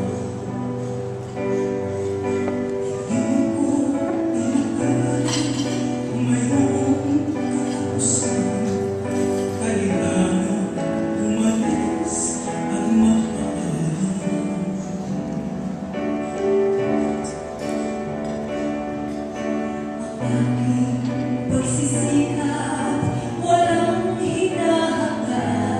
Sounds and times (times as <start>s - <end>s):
Music: 0.0s - 25.8s.